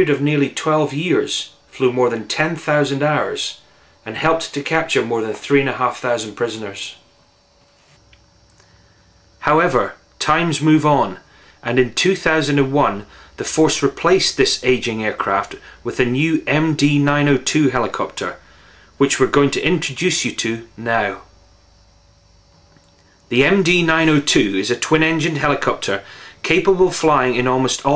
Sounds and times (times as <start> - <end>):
Speech: 0.0 - 7.0, 9.4 - 18.4, 19.0 - 21.3, 23.3 - 27.9.